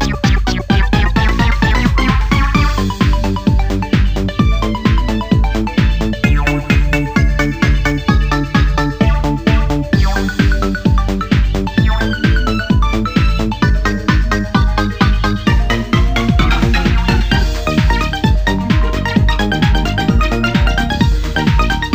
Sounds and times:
Music: 0.0s - 21.9s.

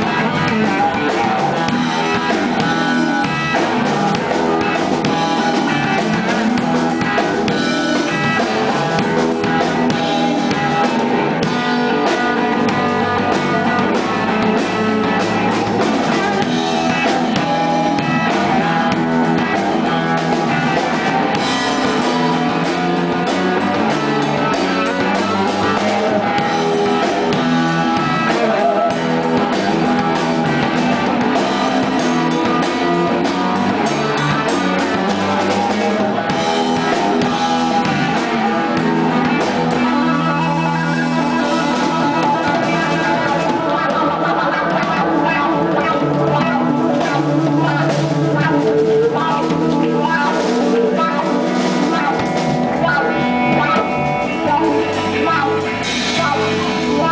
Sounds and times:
Guitar: 0.0s - 57.1s.

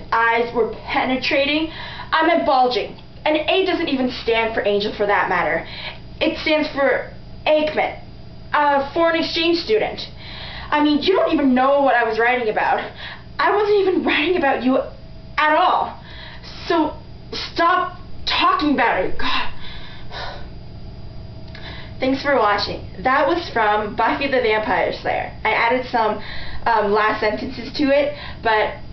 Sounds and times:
Narration, monologue: 0.0s - 28.9s.

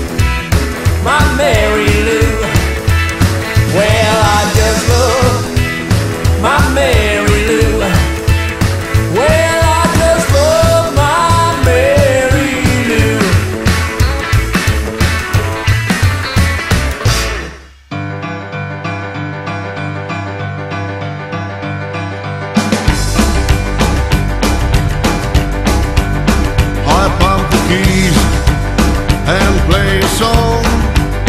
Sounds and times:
Music: 0.0s - 31.2s.

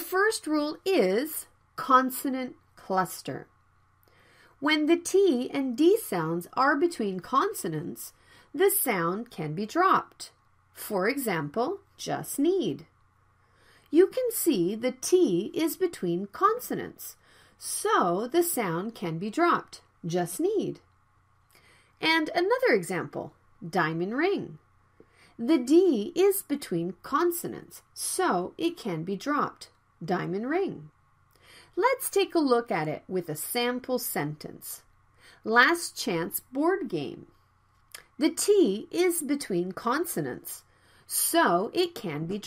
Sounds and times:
Speech: 0.0s - 3.5s, 4.6s - 12.9s, 13.9s - 20.8s, 22.0s - 24.6s, 25.4s - 30.9s, 31.8s - 34.8s, 35.4s - 37.3s, 38.0s - 42.4s.

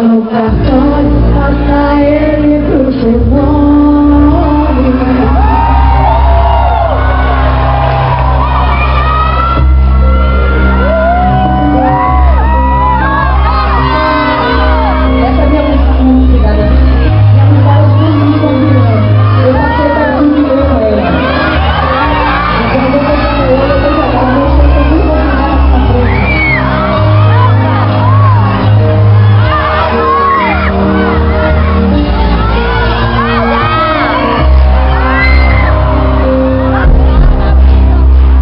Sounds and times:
Crowd: 0.0s - 38.4s
Music: 0.0s - 38.4s.

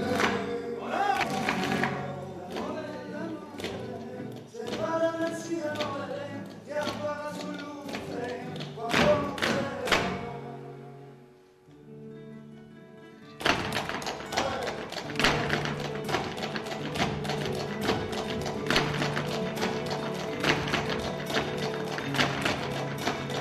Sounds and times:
Flamenco: 0.0s - 23.4s.

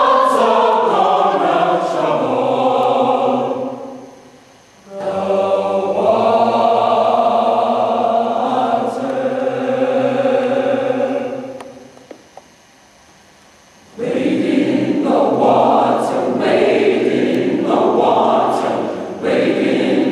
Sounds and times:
Choir: 0.0s - 11.9s, 13.9s - 20.1s.

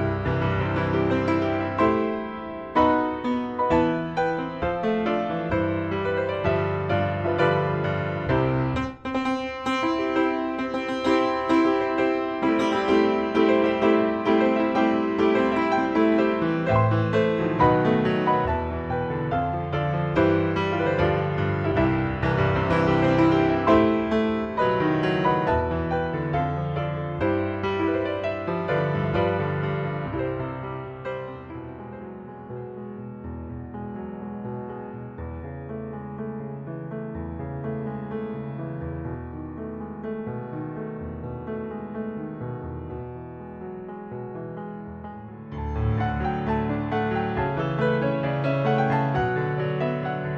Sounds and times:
Classical music: 0.0s - 50.3s.

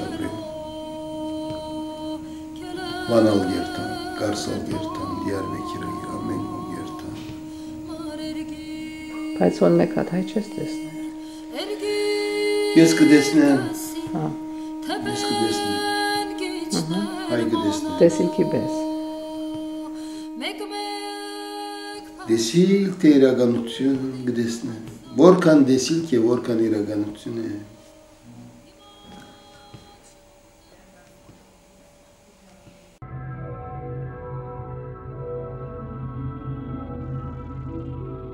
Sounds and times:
Music: 0.0s - 38.3s.

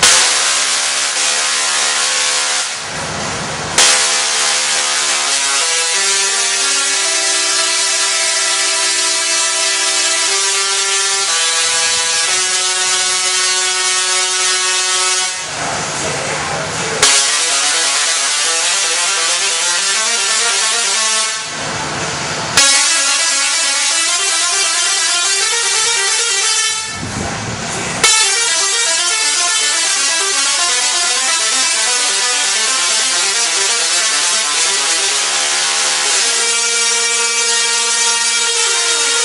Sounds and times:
Music: 0.0s - 39.2s.

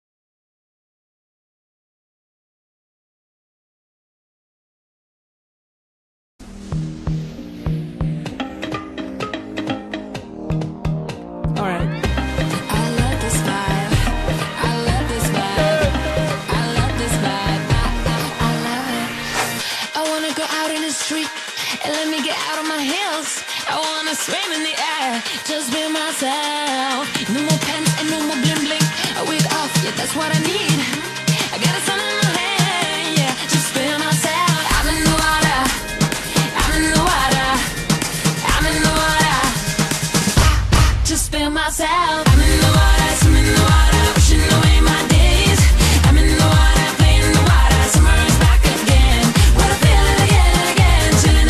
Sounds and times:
Music: 6.4s - 51.4s.

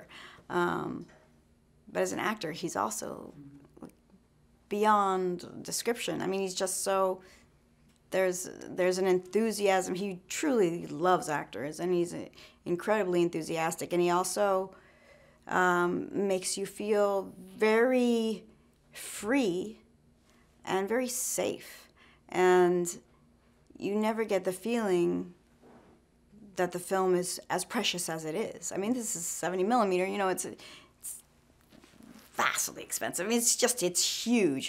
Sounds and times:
Speech: 0.0s - 1.1s, 1.9s - 4.0s, 4.7s - 7.3s, 8.1s - 14.8s, 15.5s - 19.9s, 20.6s - 23.1s, 23.7s - 25.4s, 26.4s - 31.2s, 32.3s - 34.6s.

